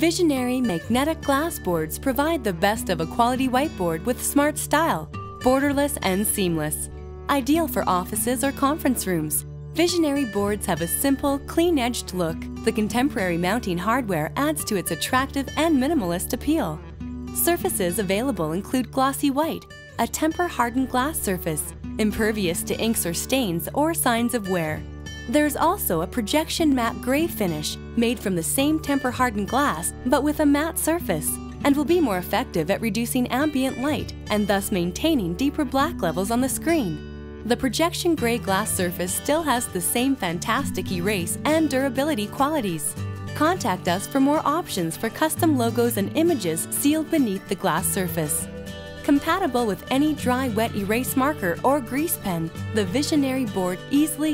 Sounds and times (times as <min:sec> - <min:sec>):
Speech: 0:00.0 - 0:16.8, 0:17.4 - 0:54.3
Music: 0:00.0 - 0:54.3.